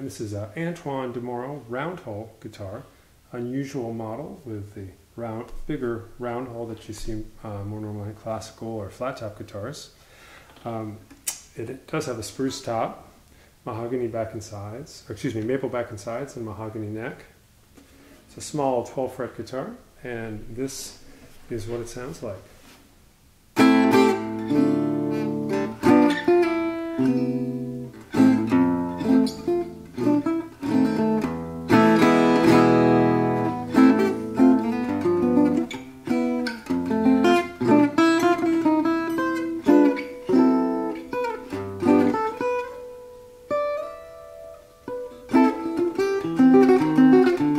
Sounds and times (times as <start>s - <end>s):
Acoustic guitar: 23.5s - 47.5s.